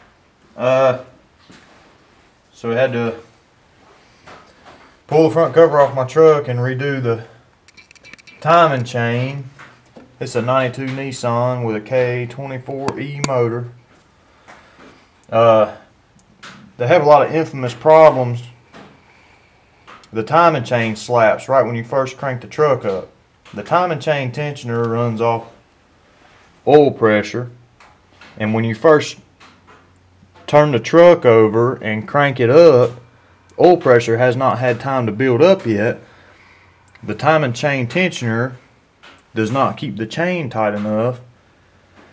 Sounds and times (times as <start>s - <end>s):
Speech: 0.6s - 1.2s, 2.5s - 3.3s, 5.1s - 7.4s, 8.4s - 9.6s, 10.2s - 13.8s, 15.3s - 15.9s, 16.8s - 18.6s, 20.1s - 25.6s, 26.6s - 27.6s, 28.4s - 29.3s, 30.5s - 33.0s, 33.6s - 36.0s, 37.0s - 38.6s, 39.3s - 41.3s.